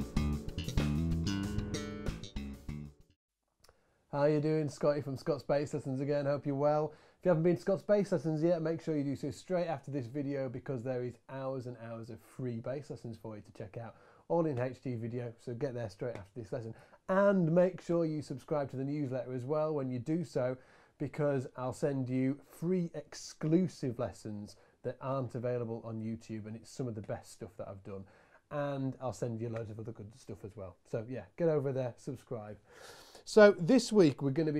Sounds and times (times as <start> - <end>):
Speech: 4.1 - 32.6, 33.2 - 34.5.